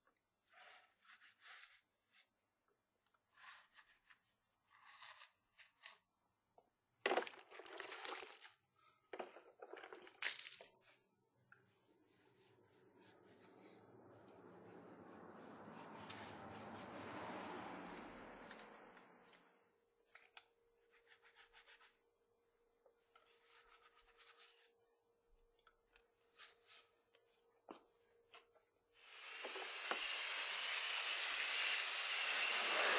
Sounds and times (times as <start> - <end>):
Rub: 0.3 - 2.4, 3.2 - 6.1, 10.8 - 17.4, 18.4 - 19.4, 20.8 - 22.2, 23.0 - 25.1, 25.8 - 27.9, 29.5 - 32.9.